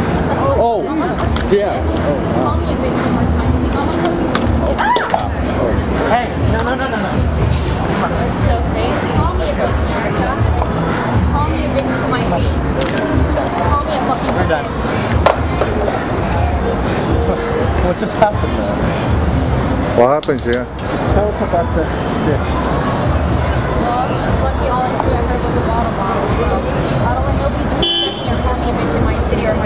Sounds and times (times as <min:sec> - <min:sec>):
Music: 0:00.0 - 0:29.6.